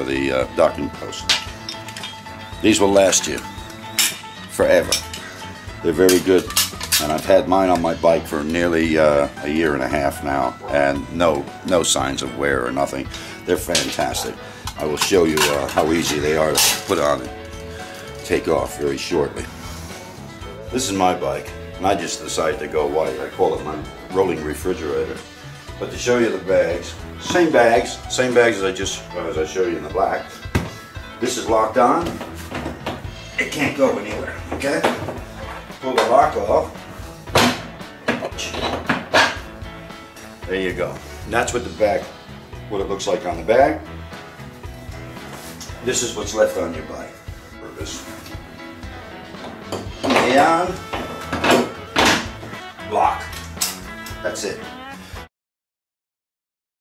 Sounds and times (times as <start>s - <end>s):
Speech: 0.0s - 1.3s, 2.6s - 3.4s, 4.6s - 5.0s, 5.8s - 17.3s, 18.2s - 19.5s, 20.7s - 25.2s, 25.8s - 30.3s, 31.2s - 32.2s, 33.4s - 35.0s, 35.8s - 36.8s, 40.4s - 42.1s, 42.7s - 43.8s, 45.8s - 48.1s, 50.0s - 50.8s, 54.2s - 54.7s
Music: 0.0s - 55.3s.